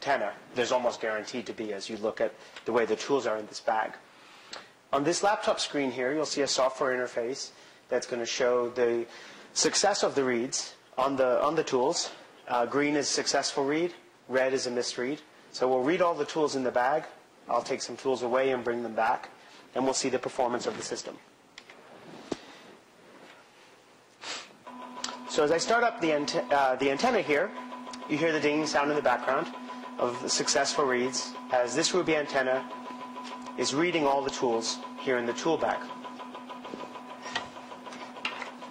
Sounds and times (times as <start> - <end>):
Speech: 0.0 - 4.0, 4.9 - 21.3, 25.3 - 32.7, 33.6 - 35.9.